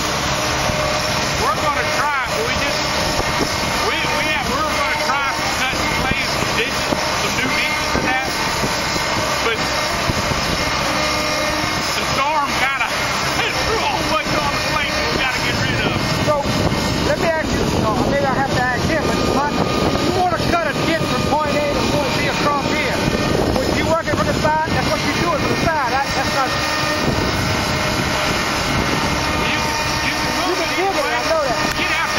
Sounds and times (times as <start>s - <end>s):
Speech: 1.4s - 2.8s, 3.8s - 8.4s, 9.4s - 9.8s, 11.9s - 26.6s, 29.4s - 32.1s.